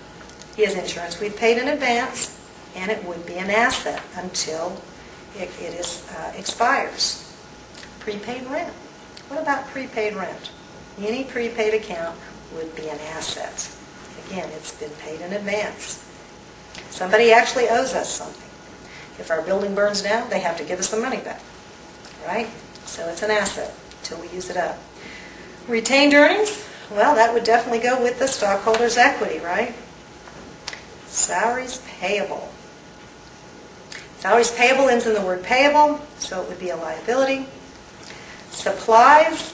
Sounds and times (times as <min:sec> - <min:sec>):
Inside, small room: 0:00.0 - 0:39.5
Speech: 0:00.6 - 0:07.3, 0:08.0 - 0:16.0, 0:16.9 - 0:18.4, 0:19.2 - 0:21.4, 0:22.2 - 0:24.8, 0:25.7 - 0:29.9, 0:31.1 - 0:32.6, 0:34.2 - 0:37.6, 0:38.5 - 0:39.5.